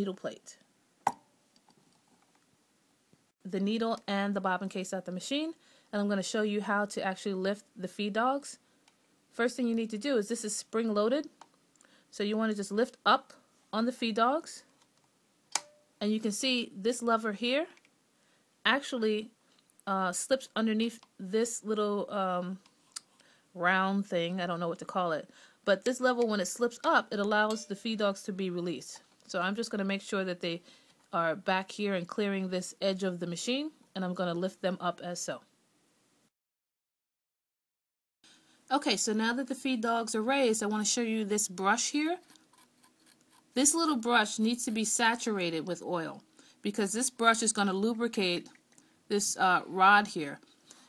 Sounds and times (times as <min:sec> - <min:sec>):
Speech: 0:00.0 - 0:00.6, 0:03.4 - 0:08.6, 0:09.4 - 0:11.3, 0:12.2 - 0:14.7, 0:16.0 - 0:17.8, 0:18.7 - 0:22.6, 0:23.6 - 0:35.5, 0:38.7 - 0:42.2, 0:43.6 - 0:48.5, 0:49.1 - 0:50.4.